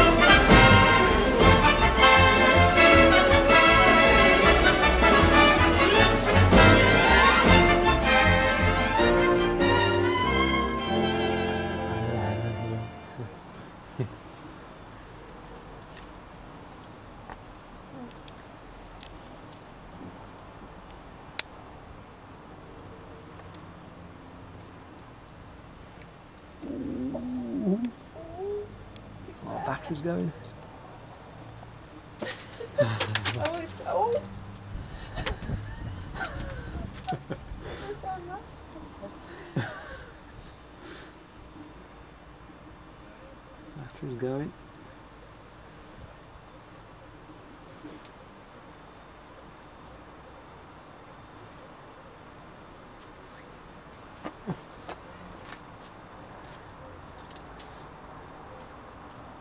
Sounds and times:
Caterwaul: 26.6 - 27.9.

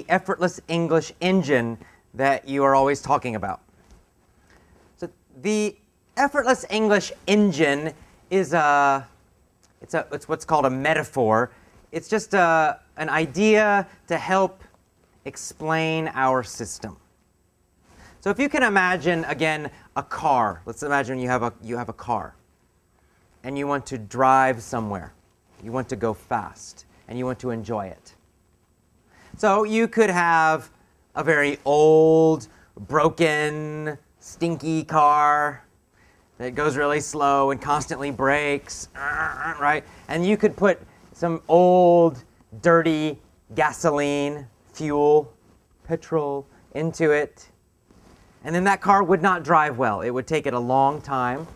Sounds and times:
Speech: 0.0 - 3.6, 5.0 - 9.2, 9.8 - 17.1, 18.2 - 22.4, 23.4 - 28.2, 29.4 - 35.7, 36.4 - 47.6, 48.4 - 51.5.

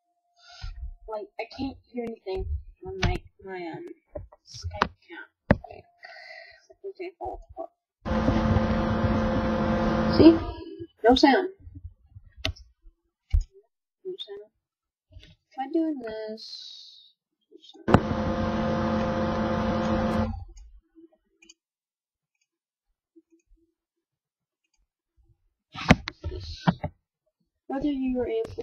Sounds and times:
Speech: 1.1 - 7.7, 10.1 - 11.6, 14.1 - 14.5, 15.6 - 17.9, 26.3 - 26.8, 27.7 - 28.6.

